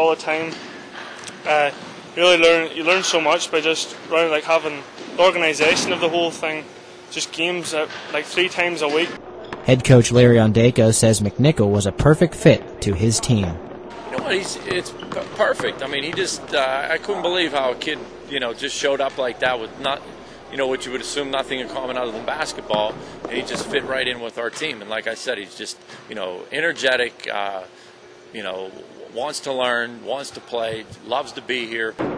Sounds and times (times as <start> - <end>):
Male speech, man speaking: 0.0 - 0.6, 1.4 - 27.7, 28.4 - 32.0.